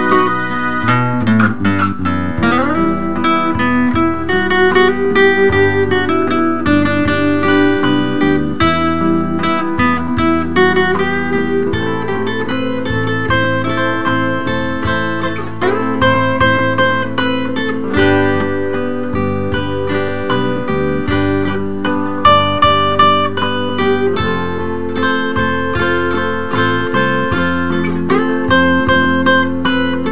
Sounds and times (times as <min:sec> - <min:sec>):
Music: 0:00.0 - 0:30.1.